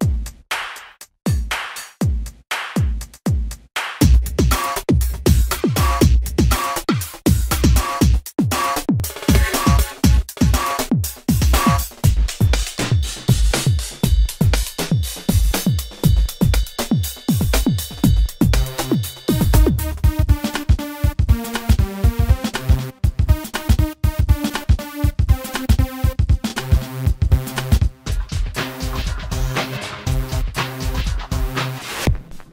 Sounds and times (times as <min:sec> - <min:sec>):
Music: 0:00.0 - 0:32.5.